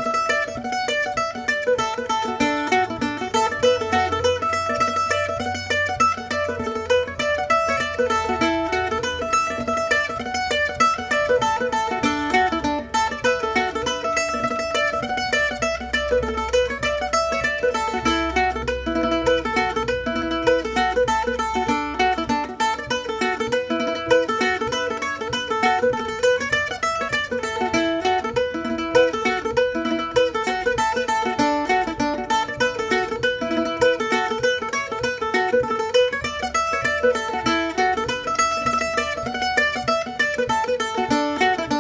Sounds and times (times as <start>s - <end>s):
Mandolin: 0.0s - 41.8s.